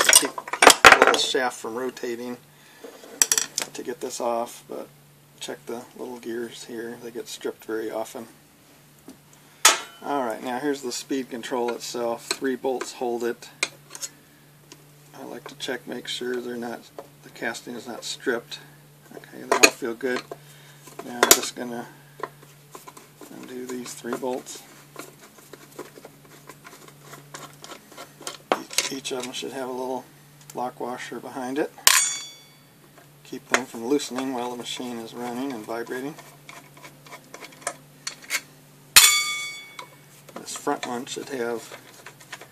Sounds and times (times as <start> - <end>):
Speech: 1.0 - 2.4, 3.6 - 8.4, 10.0 - 13.6, 15.1 - 20.3, 21.0 - 22.0, 23.3 - 24.7, 28.6 - 31.8, 33.2 - 36.2, 40.4 - 41.8.